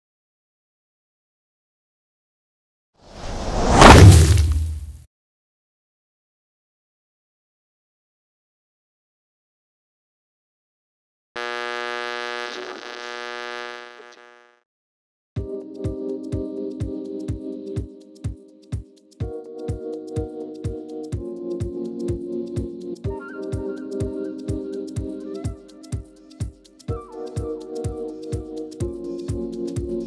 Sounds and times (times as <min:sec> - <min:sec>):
Music: 0:15.4 - 0:30.0.